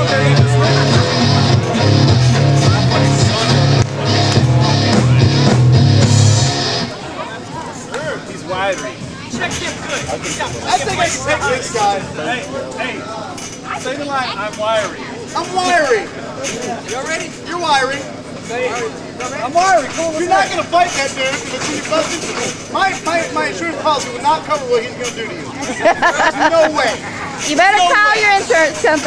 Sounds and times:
Music: 0:00.0 - 0:07.1, 0:08.5 - 0:12.2.

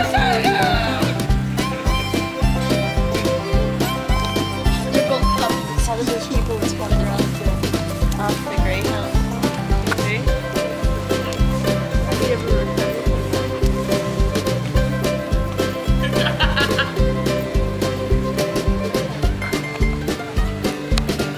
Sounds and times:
Music: 0:00.0 - 0:21.3
Speech: 0:05.0 - 0:09.2, 0:10.0 - 0:10.4, 0:12.1 - 0:13.2.

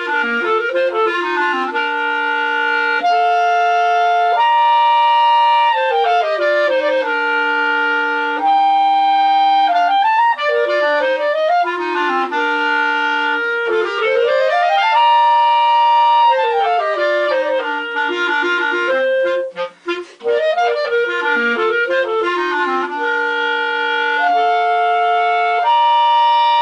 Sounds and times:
Clarinet: 0:00.0 - 0:26.6.

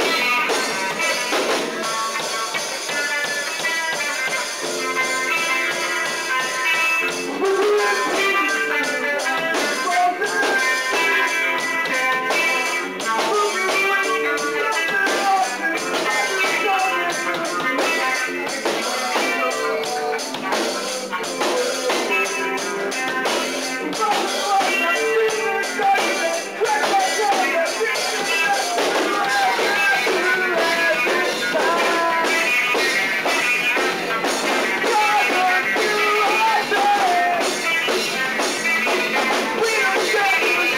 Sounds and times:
Music: 0:00.0 - 0:40.7.

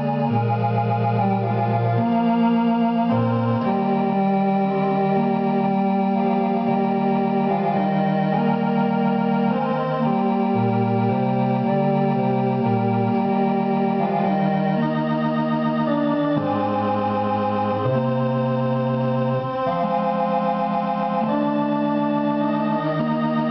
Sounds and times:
Hammond organ: 0:00.0 - 0:23.5.

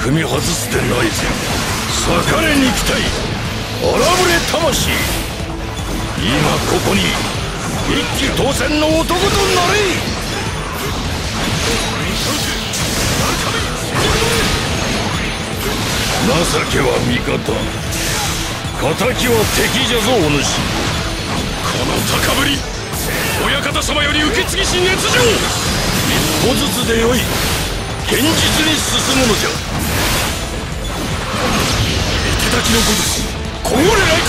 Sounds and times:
Speech: 0:00.0 - 0:03.2, 0:03.8 - 0:05.1, 0:06.2 - 0:07.3, 0:07.9 - 0:10.0, 0:16.2 - 0:17.7, 0:18.8 - 0:20.6, 0:23.4 - 0:27.3, 0:28.1 - 0:29.6, 0:32.3 - 0:34.2
Music: 0:00.0 - 0:34.2.

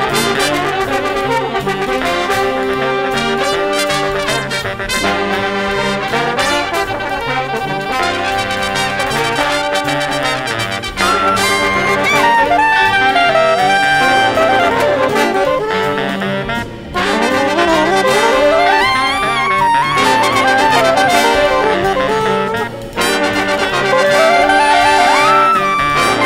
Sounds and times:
Clarinet: 0:00.0 - 0:26.2.

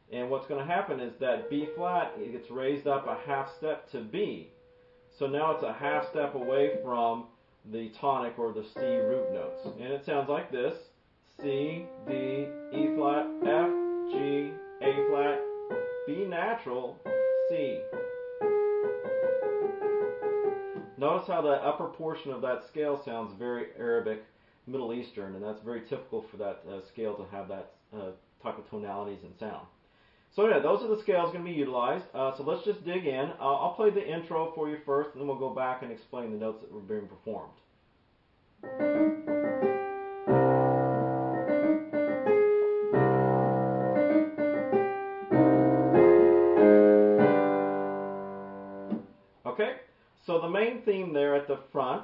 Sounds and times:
Piano: 0:01.3 - 0:04.8, 0:05.4 - 0:07.3, 0:08.7 - 0:09.9, 0:11.4 - 0:21.1, 0:38.6 - 0:49.2
Classical music: 0:01.4 - 0:02.5, 0:05.9 - 0:07.2, 0:08.8 - 0:09.8, 0:11.5 - 0:21.0, 0:38.6 - 0:49.1.

